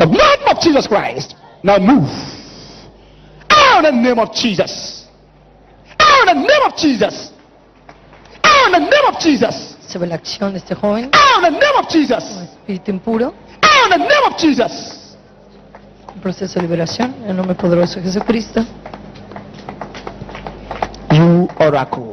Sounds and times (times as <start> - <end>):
Inside, large room or hall: 0.0 - 22.1.